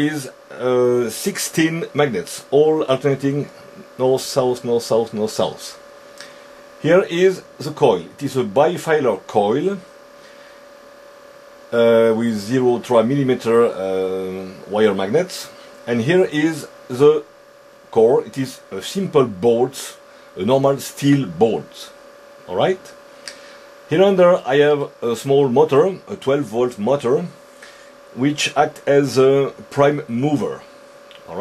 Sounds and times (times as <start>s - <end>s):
Speech: 0.0s - 5.8s, 6.8s - 9.9s, 11.7s - 17.3s, 17.9s - 23.0s, 23.9s - 27.4s, 28.2s - 31.4s.